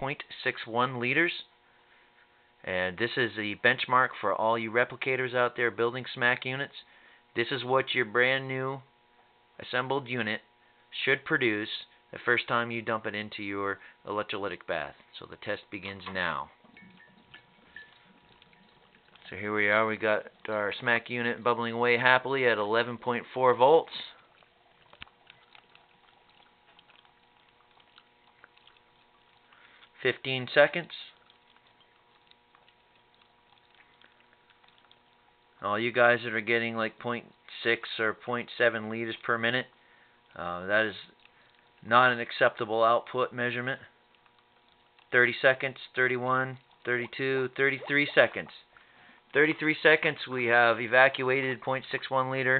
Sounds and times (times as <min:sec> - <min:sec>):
Speech: 0:00.0 - 0:01.5, 0:02.6 - 0:08.9, 0:09.6 - 0:16.6, 0:19.2 - 0:24.2, 0:30.0 - 0:31.2, 0:35.6 - 0:39.7, 0:40.4 - 0:41.1, 0:41.8 - 0:43.9, 0:45.1 - 0:48.7, 0:49.4 - 0:52.5.